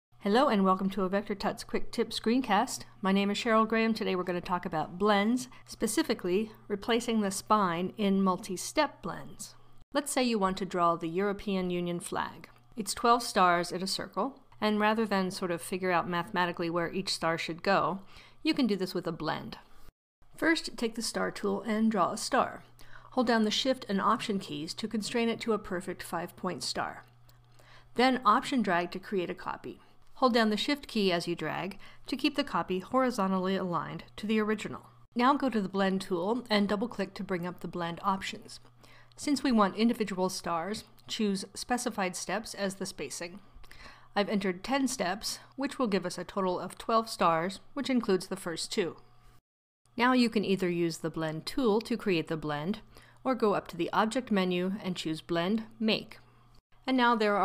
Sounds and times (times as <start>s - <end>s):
Narration, monologue: 0.1s - 57.4s.